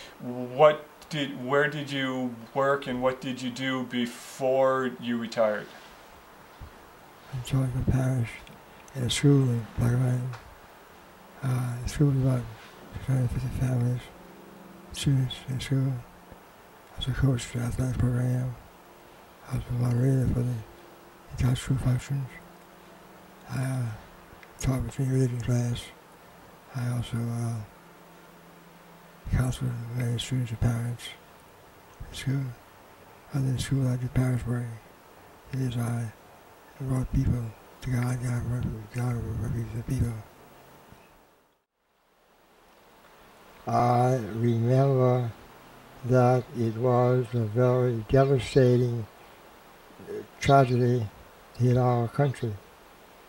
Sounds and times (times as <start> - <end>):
Male speech, man speaking: 0.0 - 5.8, 7.3 - 10.4, 11.4 - 14.1, 14.9 - 16.1, 17.0 - 18.6, 19.5 - 20.7, 21.3 - 22.4, 23.5 - 24.0, 24.6 - 26.0, 26.7 - 27.7, 29.3 - 31.2, 32.1 - 32.6, 33.3 - 34.8, 35.5 - 36.2, 36.8 - 40.3, 43.7 - 45.4, 46.0 - 49.1, 50.0 - 52.6
Narration, monologue: 0.0 - 53.2.